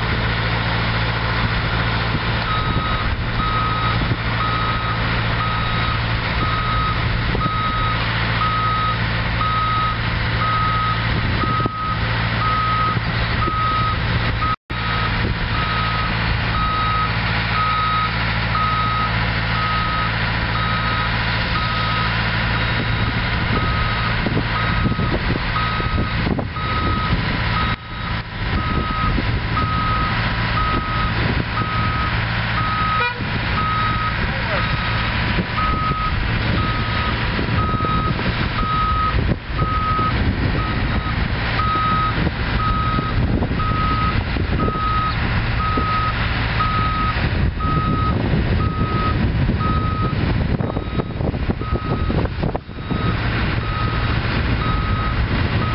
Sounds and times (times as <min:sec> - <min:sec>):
Vehicle: 0:00.0 - 0:55.7.